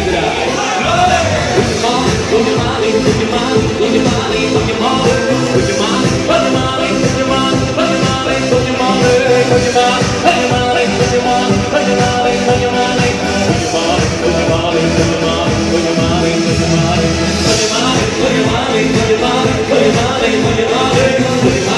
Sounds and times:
Choir: 0.0s - 21.7s
Music of Latin America: 0.0s - 21.7s.

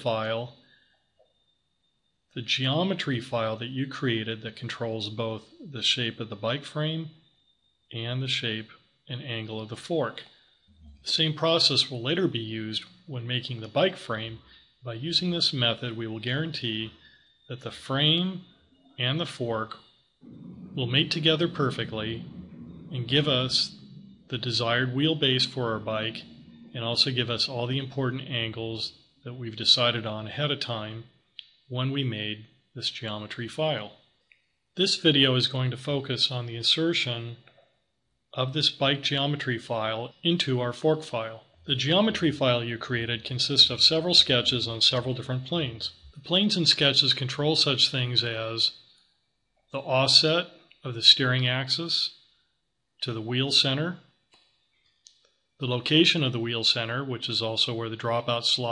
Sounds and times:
Speech: 0.0s - 0.6s, 2.4s - 7.2s, 7.9s - 10.3s, 11.0s - 31.1s, 31.7s - 34.0s, 34.8s - 37.5s, 38.4s - 48.7s, 49.8s - 52.1s, 53.0s - 54.0s, 55.6s - 58.7s.

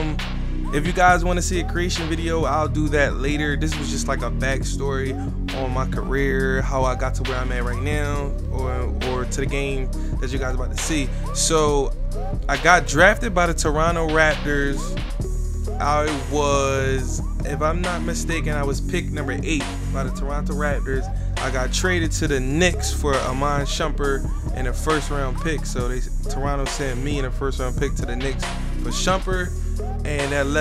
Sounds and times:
Speech: 0.0s - 11.9s, 12.5s - 14.9s, 15.7s - 30.6s
Music: 0.0s - 30.6s.

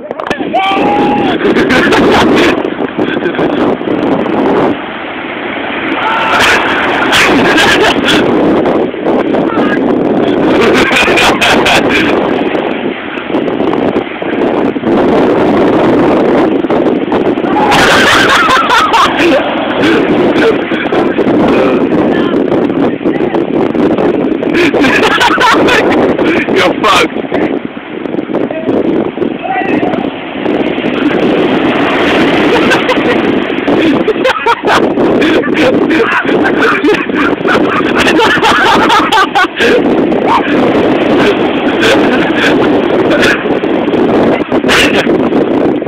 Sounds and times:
Speech: 29.4s - 30.0s.

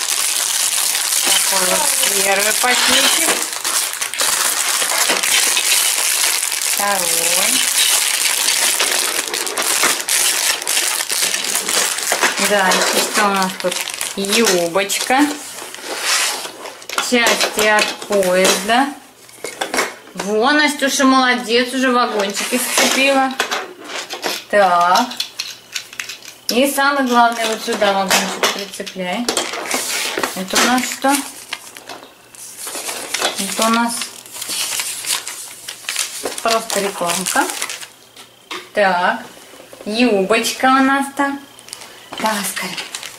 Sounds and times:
Speech: 1.4s - 3.5s, 6.8s - 7.7s, 12.4s - 15.4s, 17.0s - 19.0s, 20.2s - 23.4s, 24.5s - 25.2s, 26.5s - 29.3s, 30.4s - 31.3s, 33.4s - 34.1s, 36.4s - 37.6s, 38.8s - 39.3s, 39.9s - 41.5s, 42.2s - 42.9s.

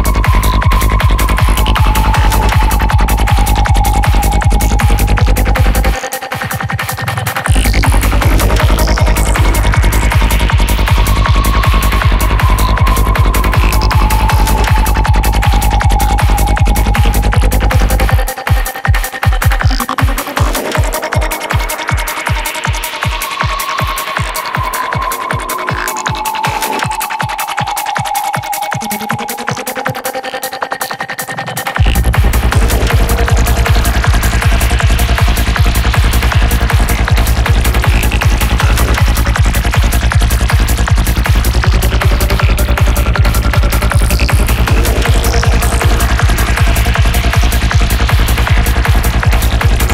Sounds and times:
Trance music: 0.0s - 49.9s.

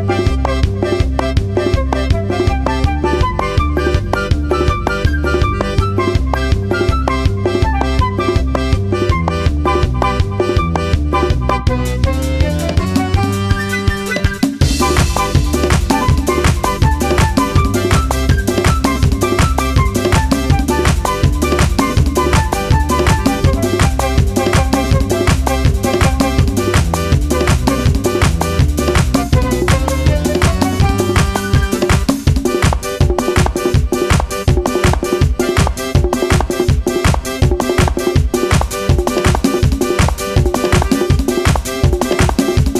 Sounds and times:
Music: 0.0s - 42.7s.

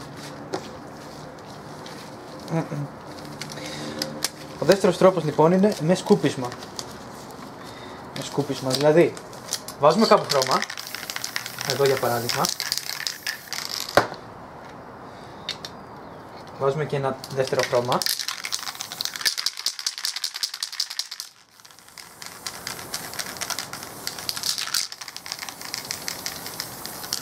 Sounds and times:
Speech: 4.6s - 6.6s, 8.2s - 9.2s, 9.8s - 10.6s, 16.6s - 18.0s
Spray: 10.3s - 14.0s, 18.2s - 27.2s.

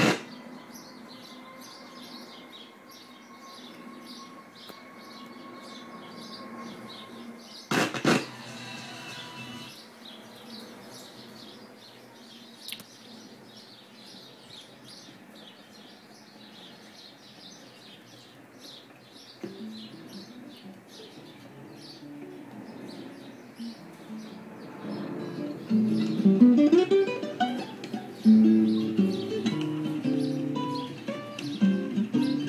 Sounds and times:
Radio: 7.7s - 9.7s.

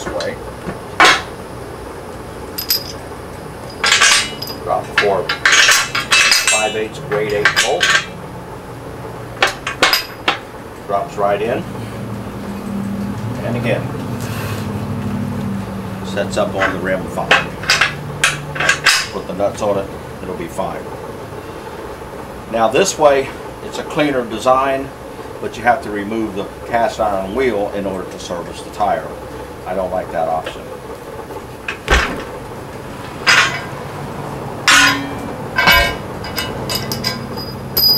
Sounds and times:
Speech: 0.0s - 0.4s, 4.6s - 5.3s, 6.5s - 7.9s, 10.8s - 11.7s, 13.4s - 13.9s, 16.0s - 17.5s, 19.1s - 20.9s, 22.5s - 30.7s.

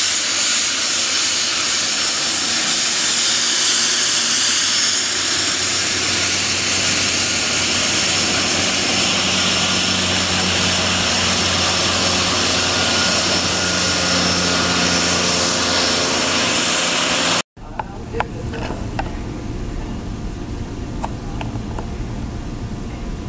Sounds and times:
Fixed-wing aircraft, airplane: 0.0s - 23.2s.

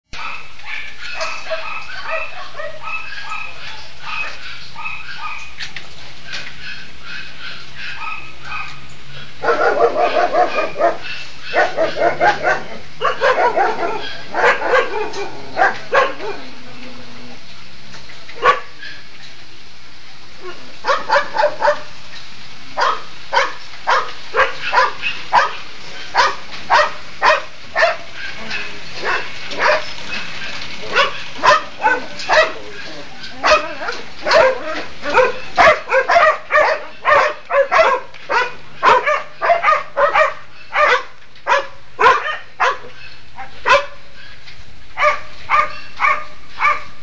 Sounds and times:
Dog: 0.2s - 5.5s, 9.4s - 16.5s, 18.4s - 18.7s, 20.4s - 21.9s, 22.8s - 44.3s, 45.0s - 46.9s.

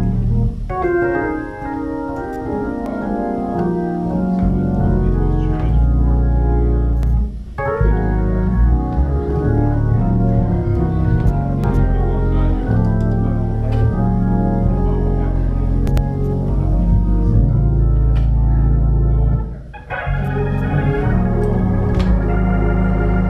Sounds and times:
Hammond organ: 0.0s - 23.2s.

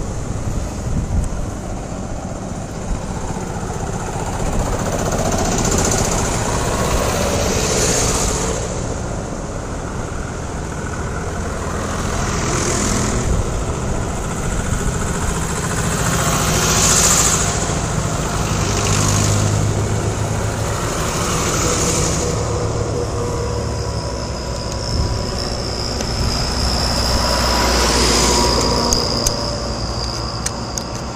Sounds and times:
Vehicle: 0.0s - 31.1s.

